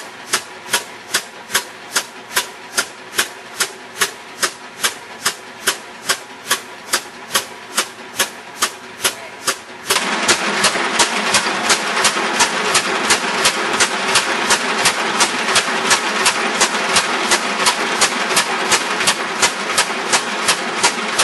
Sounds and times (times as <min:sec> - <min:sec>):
Engine: 0:00.0 - 0:21.2
Speech: 0:09.0 - 0:09.6.